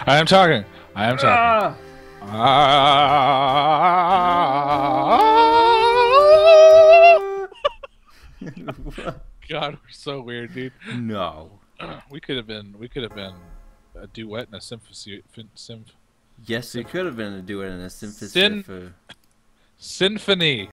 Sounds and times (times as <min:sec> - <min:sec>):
Speech: 0:09.4 - 0:13.4, 0:14.0 - 0:19.0, 0:19.8 - 0:20.7.